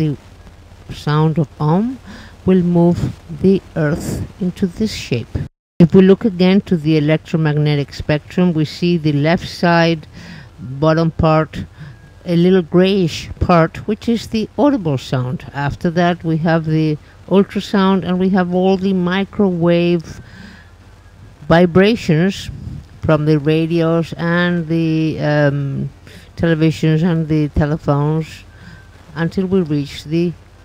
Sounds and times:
Speech: 0:00.0 - 0:00.2, 0:00.9 - 0:20.2, 0:21.4 - 0:28.5, 0:29.1 - 0:30.4.

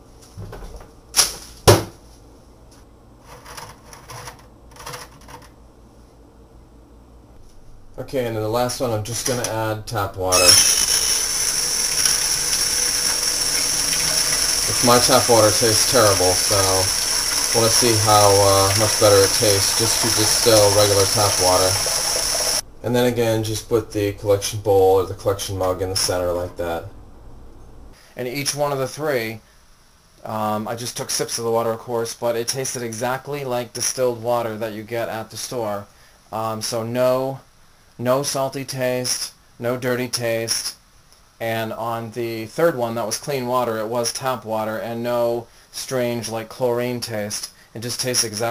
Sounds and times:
Sink (filling or washing): 0:10.4 - 0:22.6
Water: 0:11.2 - 0:22.6.

